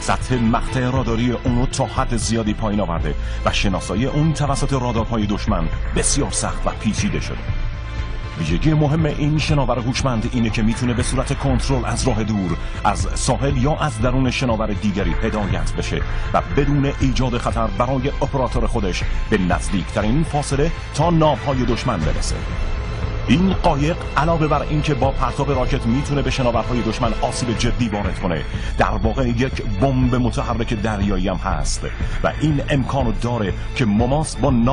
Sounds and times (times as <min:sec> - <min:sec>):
Speech: 0:00.0 - 0:07.4, 0:08.4 - 0:22.5, 0:23.3 - 0:34.7
Music: 0:00.0 - 0:34.7.